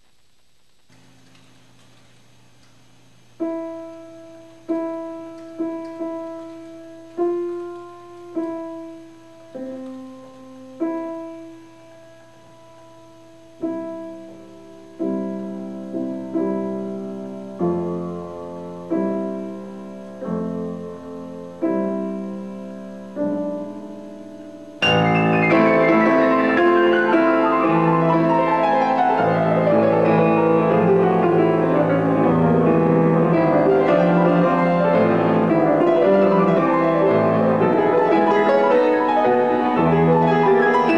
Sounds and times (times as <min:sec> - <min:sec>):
Music: 0:03.4 - 0:40.9.